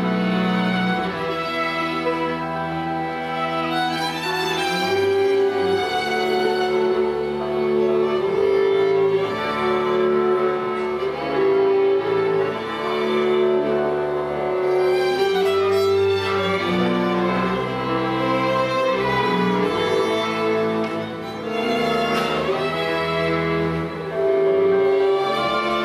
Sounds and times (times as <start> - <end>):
Cello: 0.0 - 25.8
Double bass: 0.0 - 25.8
Violin, fiddle: 0.0 - 25.8.